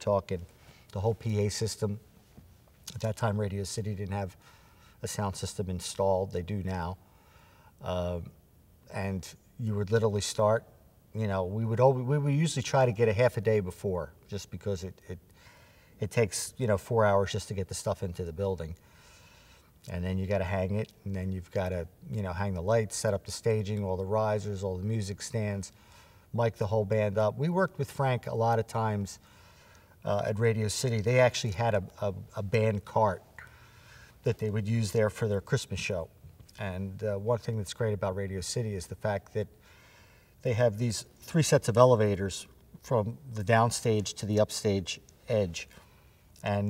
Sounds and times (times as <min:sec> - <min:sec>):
Speech: 0:00.0 - 0:02.0, 0:02.9 - 0:04.4, 0:05.0 - 0:07.0, 0:07.8 - 0:15.2, 0:16.0 - 0:18.8, 0:19.9 - 0:25.7, 0:26.3 - 0:29.2, 0:30.0 - 0:33.2, 0:34.2 - 0:39.5, 0:40.4 - 0:45.8, 0:46.4 - 0:46.6.